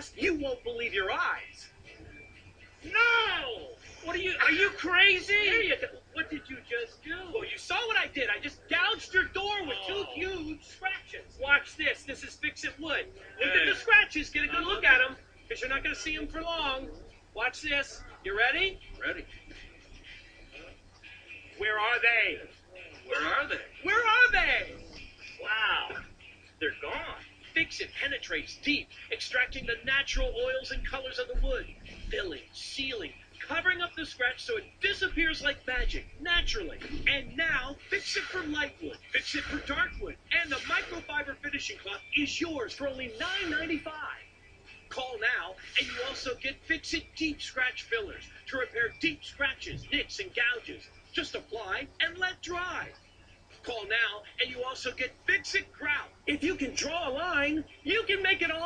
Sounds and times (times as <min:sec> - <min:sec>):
Speech: 0:00.0 - 0:01.7, 0:02.8 - 0:19.6, 0:20.5 - 0:44.3, 0:44.9 - 0:53.0, 0:53.6 - 0:58.6
Music: 0:00.0 - 0:58.6.